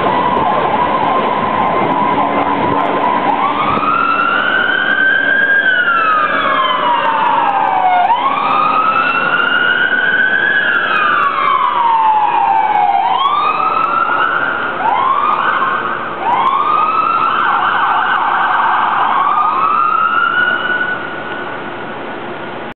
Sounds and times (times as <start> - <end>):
Truck: 0.0 - 22.7.